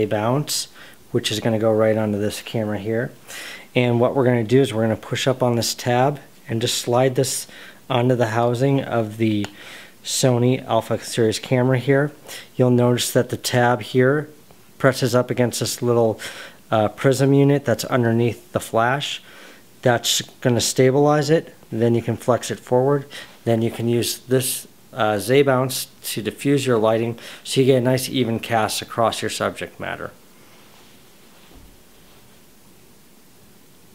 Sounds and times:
Speech: 0.0s - 30.2s.

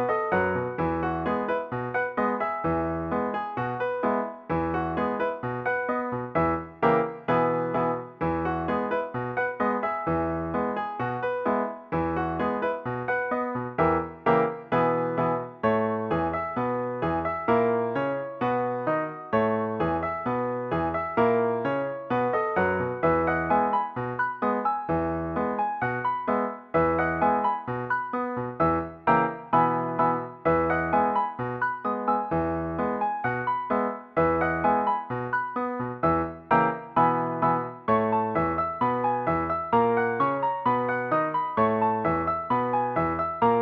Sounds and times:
Music: 0.0s - 43.6s.

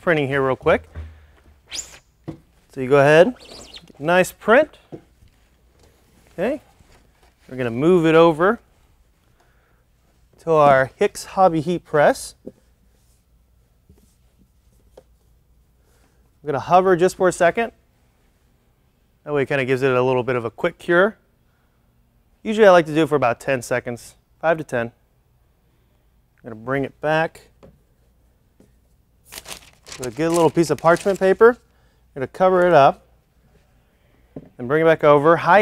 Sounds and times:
Speech: 0.0s - 0.9s, 2.7s - 3.4s, 4.0s - 4.8s, 6.4s - 6.7s, 7.5s - 8.6s, 10.4s - 12.4s, 16.4s - 17.8s, 19.3s - 21.2s, 22.4s - 25.0s, 26.4s - 27.5s, 30.0s - 31.6s, 32.2s - 33.1s, 34.6s - 35.6s.

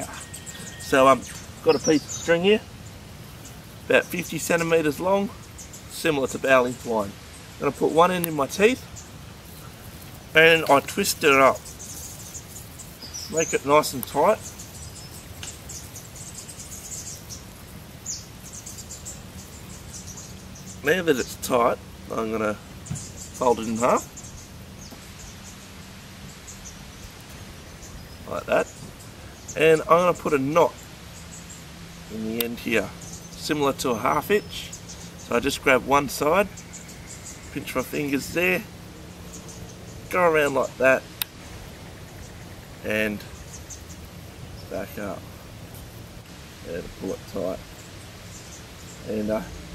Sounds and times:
Speech: 0.0s - 2.7s, 3.9s - 8.8s, 10.4s - 11.6s, 13.3s - 14.4s, 20.8s - 22.6s, 23.4s - 24.1s, 28.3s - 28.7s, 29.6s - 30.8s, 32.1s - 36.6s, 37.6s - 38.7s, 40.1s - 41.1s, 42.8s - 43.3s, 44.7s - 45.2s, 46.6s - 47.6s, 49.0s - 49.6s.

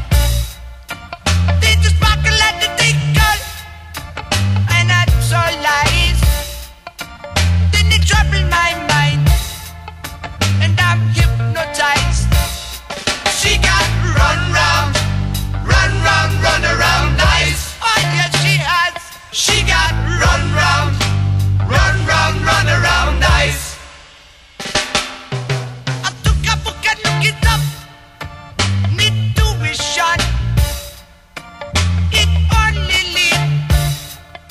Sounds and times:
Heavy metal: 0.0s - 31.1s.

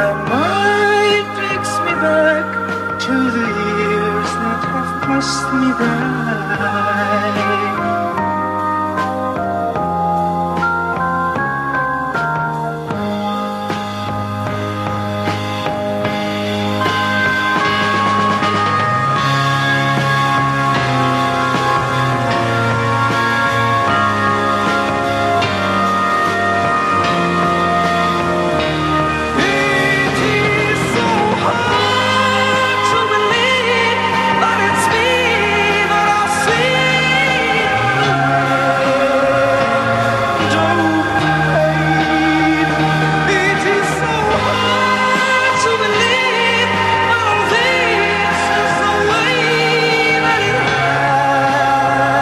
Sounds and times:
Music: 0.0s - 52.2s.

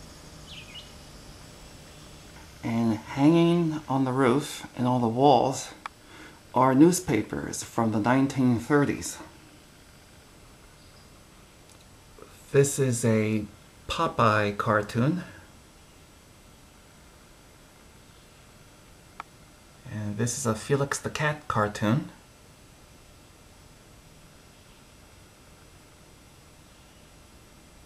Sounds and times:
Speech: 2.6s - 5.8s, 6.6s - 9.4s, 12.3s - 15.5s, 19.9s - 22.2s.

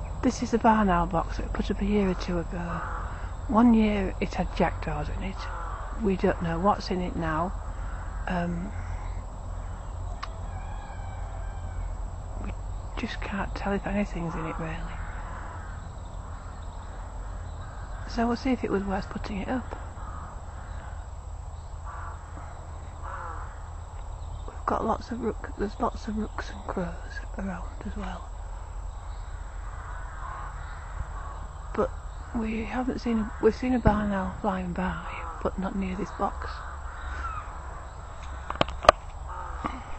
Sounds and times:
Bird: 0.0s - 39.9s
Speech: 0.2s - 2.9s, 3.5s - 7.6s, 8.3s - 8.8s, 12.4s - 15.0s, 18.1s - 19.8s, 24.5s - 28.3s, 31.8s - 36.6s.

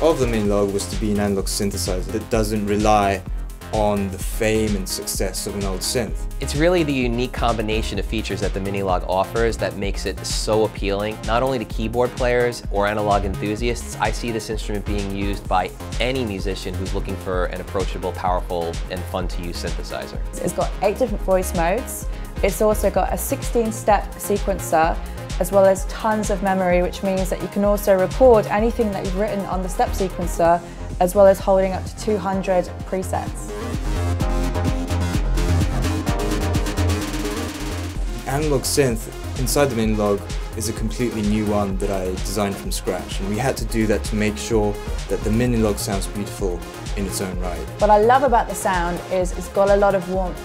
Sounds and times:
Speech: 0.0s - 33.4s, 38.3s - 50.3s
Music: 0.0s - 50.4s.

